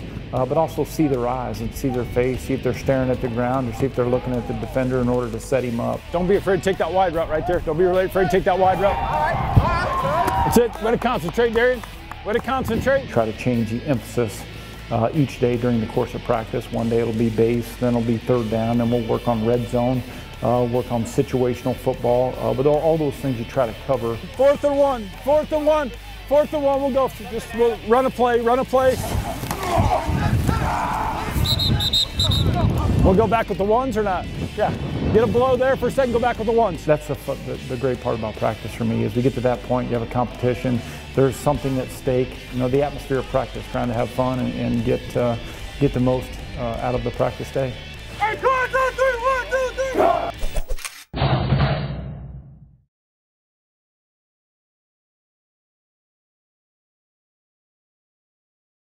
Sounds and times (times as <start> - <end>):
Music: 0.0 - 50.4
Speech: 0.3 - 29.1, 33.0 - 50.3.